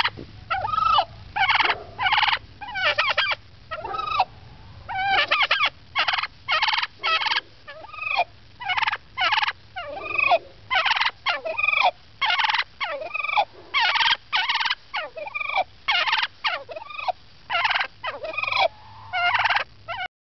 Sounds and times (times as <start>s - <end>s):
Gobble: 0.0s - 20.1s.